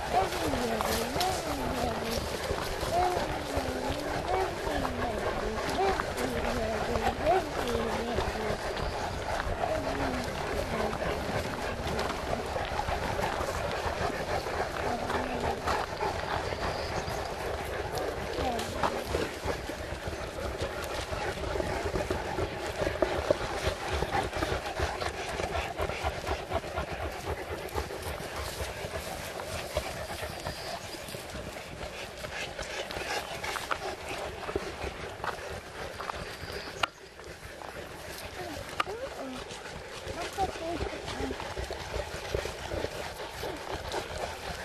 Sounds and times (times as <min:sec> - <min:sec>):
Walk, footsteps: 0:00.0 - 0:44.6.